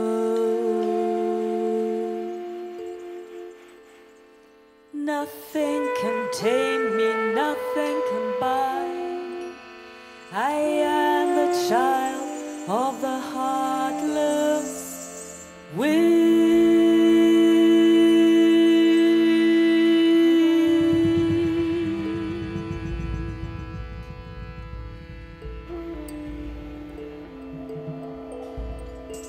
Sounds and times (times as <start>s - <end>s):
Singing: 0.0s - 3.6s, 5.0s - 9.6s, 10.3s - 23.6s
Musical instrument: 0.0s - 29.2s.